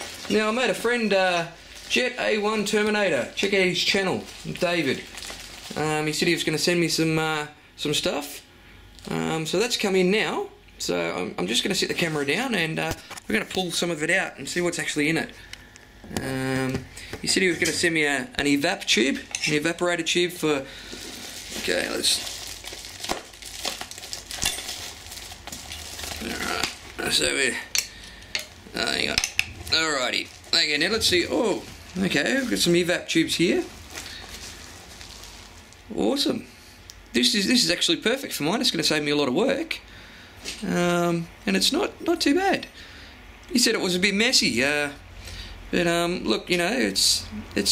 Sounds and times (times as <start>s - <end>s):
Speech: 0.3s - 5.1s, 5.7s - 8.4s, 9.0s - 15.4s, 16.1s - 20.7s, 21.6s - 22.2s, 26.2s - 27.7s, 28.7s - 33.7s, 35.9s - 36.5s, 37.1s - 39.8s, 40.6s - 42.7s, 43.5s - 45.0s, 45.7s - 47.7s.